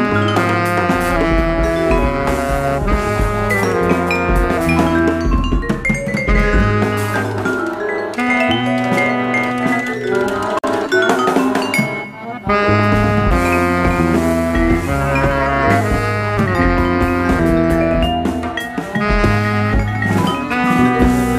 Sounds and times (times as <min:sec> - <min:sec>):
Accordion: 0:00.0 - 0:21.3
Brass instrument: 0:00.0 - 0:21.3
Drum: 0:00.0 - 0:21.3
Jazz: 0:00.0 - 0:21.3
Saxophone: 0:00.0 - 0:21.3.